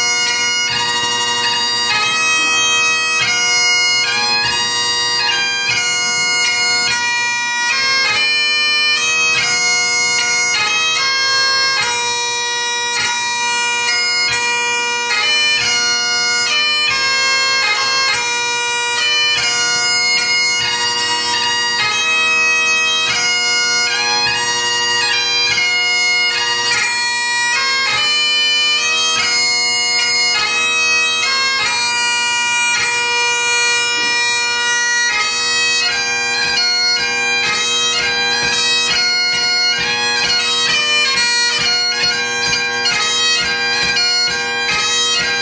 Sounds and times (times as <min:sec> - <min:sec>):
Bagpipes: 0:00.0 - 0:45.4
Wind instrument, woodwind instrument: 0:00.0 - 0:45.4.